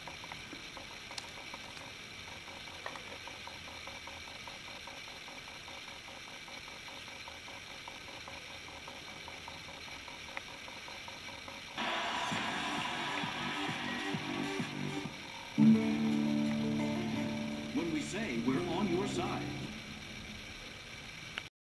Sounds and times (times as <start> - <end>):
Music: 11.8 - 19.7
Speech: 17.8 - 19.6.